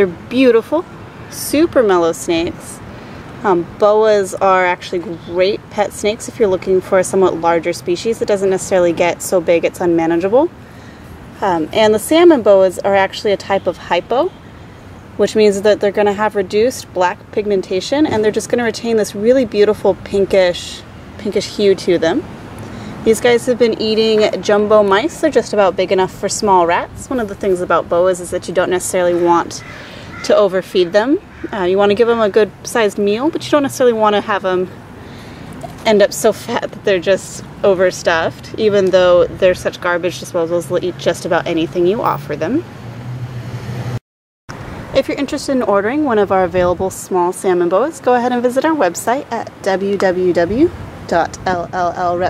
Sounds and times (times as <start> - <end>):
Speech: 0.0 - 2.8, 3.4 - 10.6, 11.4 - 14.4, 15.2 - 22.3, 23.0 - 34.8, 35.7 - 42.7, 45.0 - 52.2
Outside, rural or natural: 0.0 - 52.2.